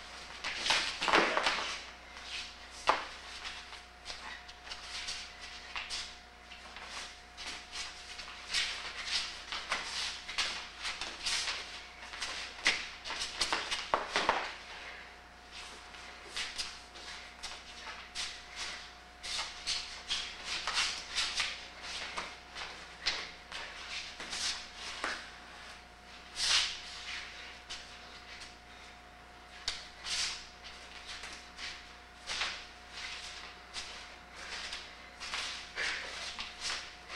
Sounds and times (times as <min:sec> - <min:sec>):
Inside, small room: 0:00.0 - 0:37.1.